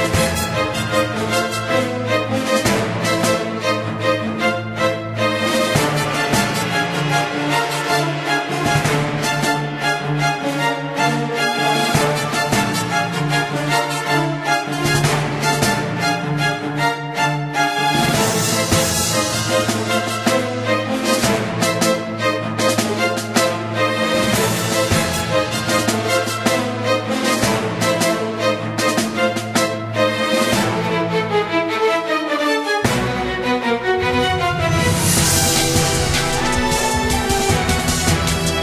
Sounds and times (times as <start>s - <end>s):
Music: 0.0s - 38.6s.